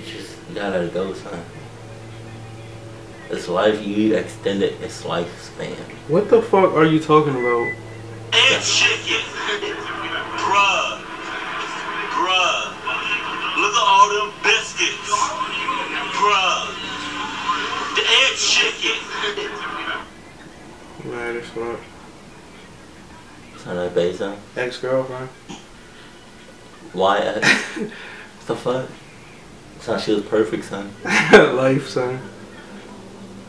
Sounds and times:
Speech: 0:00.0 - 0:20.0, 0:28.4 - 0:29.0, 0:29.8 - 0:32.3.

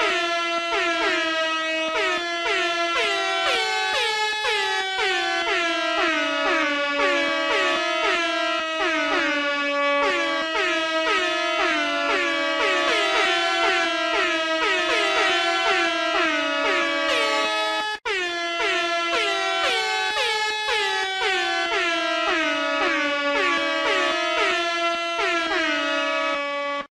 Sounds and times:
Music: 0:00.0 - 0:06.6, 0:11.1 - 0:24.6.

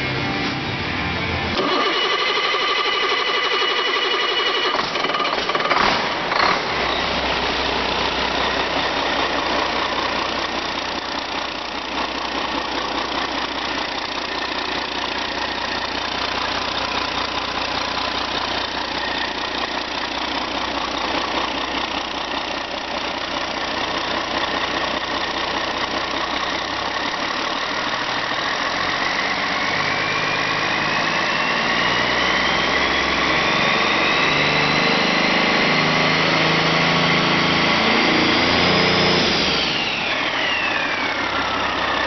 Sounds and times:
Heavy engine (low frequency): 0:00.0 - 0:42.0
Idling: 0:01.5 - 0:33.3, 0:39.2 - 0:42.0.

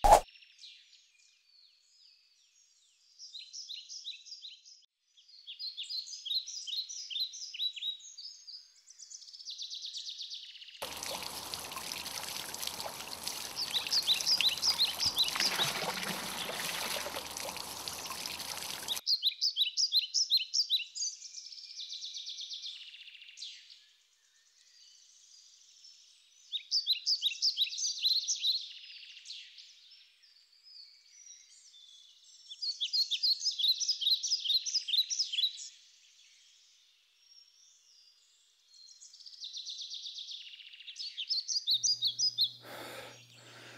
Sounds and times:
Pour: 0:10.8 - 0:19.0.

